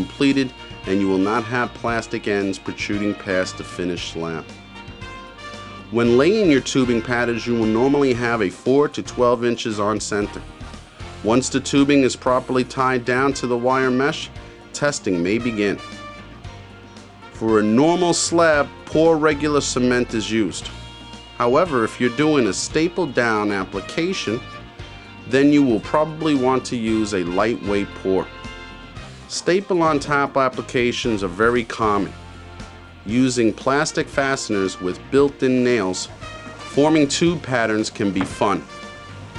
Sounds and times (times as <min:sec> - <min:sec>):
Speech: 0:00.0 - 0:04.5, 0:05.9 - 0:10.4, 0:11.2 - 0:15.8, 0:17.4 - 0:20.7, 0:21.4 - 0:24.4, 0:25.3 - 0:28.3, 0:29.3 - 0:32.1, 0:33.1 - 0:36.1, 0:36.7 - 0:38.7
Music: 0:00.0 - 0:39.3.